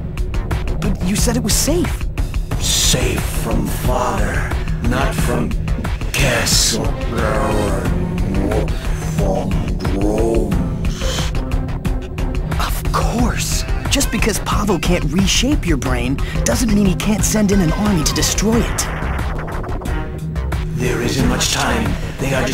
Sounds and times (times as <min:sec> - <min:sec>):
Music: 0:00.0 - 0:22.5
Speech: 0:00.8 - 0:02.0, 0:02.6 - 0:11.3, 0:12.6 - 0:18.9, 0:20.8 - 0:22.5.